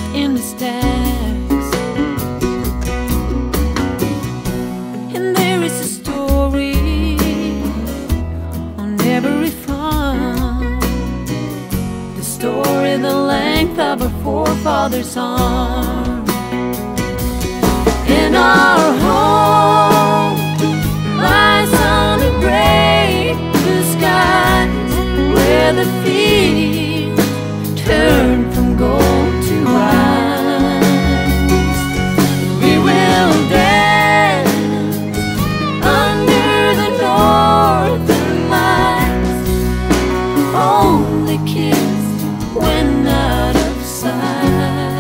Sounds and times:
Music: 0.0 - 45.0.

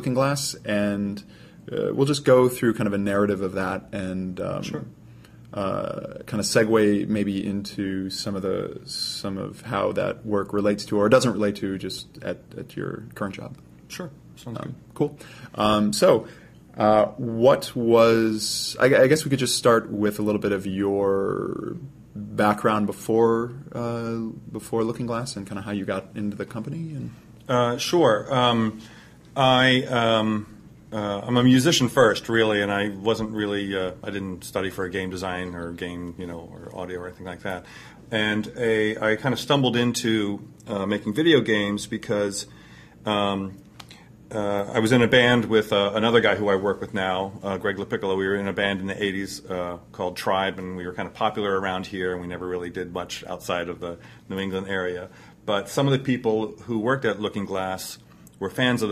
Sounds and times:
Speech: 0.0 - 28.8, 29.4 - 43.6, 44.3 - 58.9.

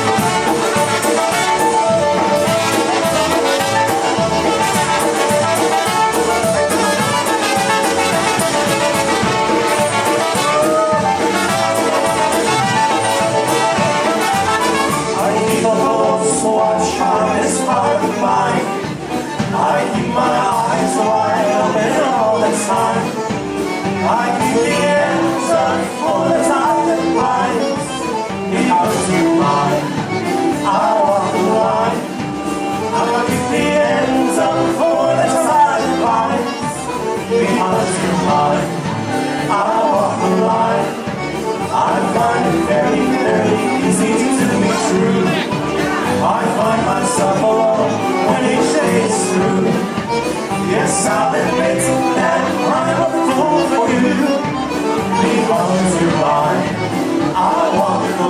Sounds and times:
Music: 0.0 - 58.2.

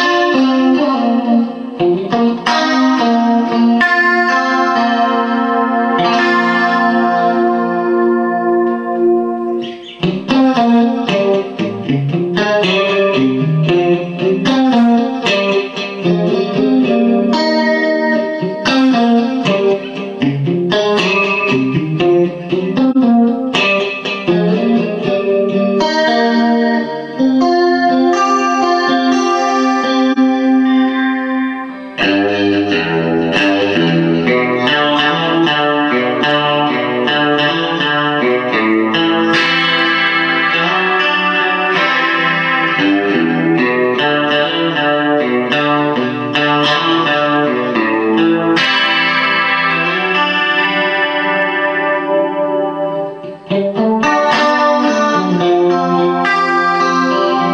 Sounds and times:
Music: 0.0 - 57.5.

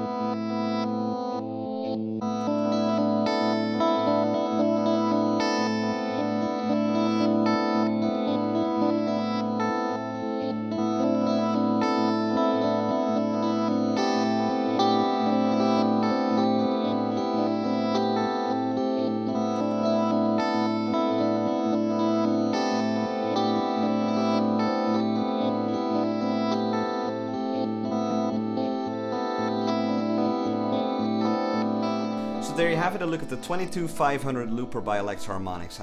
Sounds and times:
Effects unit: 0.0 - 35.8
Guitar: 0.0 - 35.8.

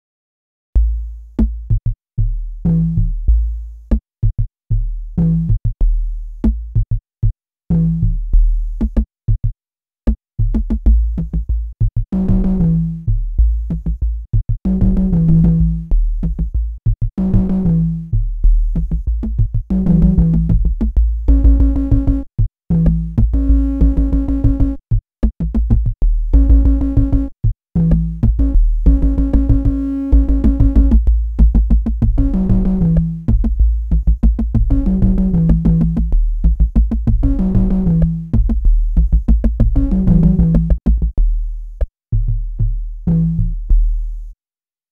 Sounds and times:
Music: 0.8 - 44.4.

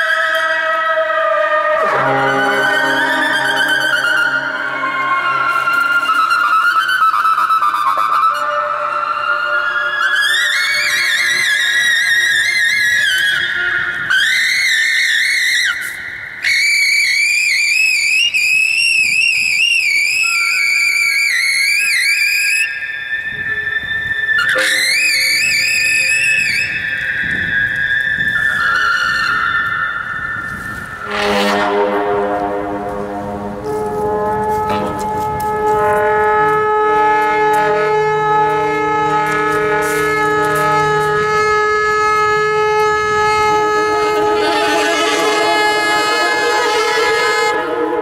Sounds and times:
Saxophone: 0.0 - 17.2, 23.3 - 48.0.

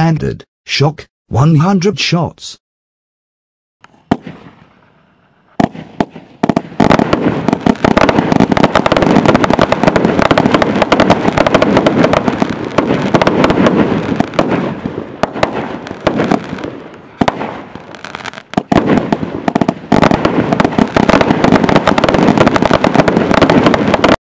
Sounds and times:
Firecracker: 3.9 - 24.2.

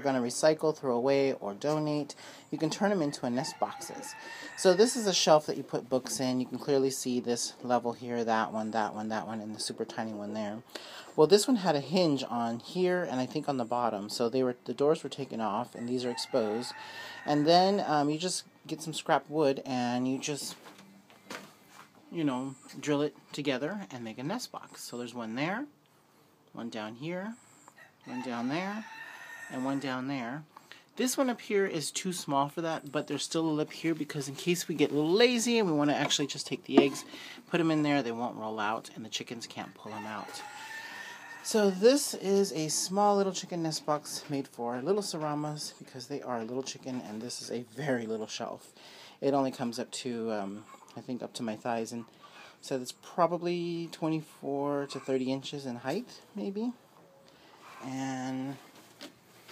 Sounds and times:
Speech: 0.0 - 20.6, 22.1 - 25.7, 26.6 - 27.4, 28.1 - 28.9, 29.5 - 40.5, 41.4 - 56.8, 57.8 - 58.7.

